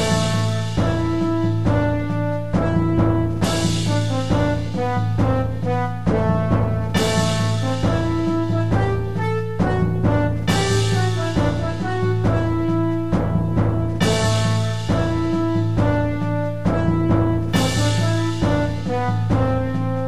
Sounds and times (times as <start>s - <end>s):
Tender music: 0.0s - 20.0s.